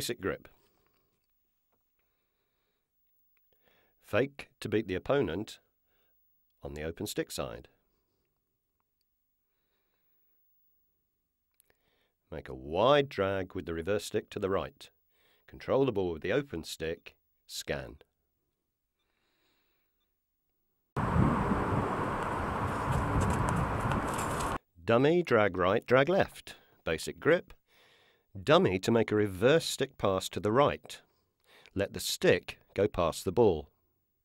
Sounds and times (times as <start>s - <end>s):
Speech: 0.0s - 0.5s, 4.1s - 5.6s, 6.6s - 7.7s, 12.3s - 14.9s, 15.5s - 18.1s, 24.8s - 27.6s, 28.4s - 31.1s, 31.8s - 33.7s.